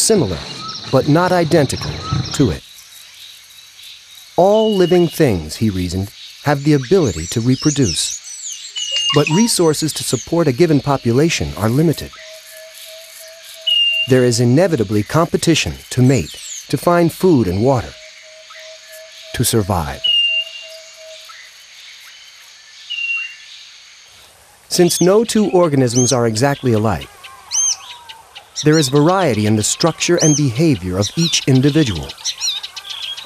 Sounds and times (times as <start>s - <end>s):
Speech: 0.0s - 2.6s, 4.4s - 8.2s, 9.0s - 12.1s, 14.1s - 18.0s, 19.4s - 20.1s, 24.7s - 27.1s, 28.6s - 32.2s
Chirp, tweet: 0.0s - 5.2s, 6.0s - 10.4s, 12.1s - 14.1s, 17.4s - 23.6s, 24.8s - 33.2s.